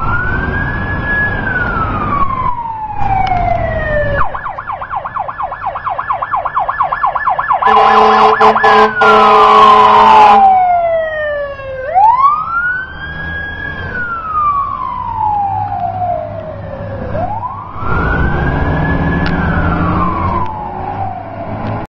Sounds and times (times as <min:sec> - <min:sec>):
Truck: 0:00.0 - 0:06.8, 0:07.6 - 0:21.9.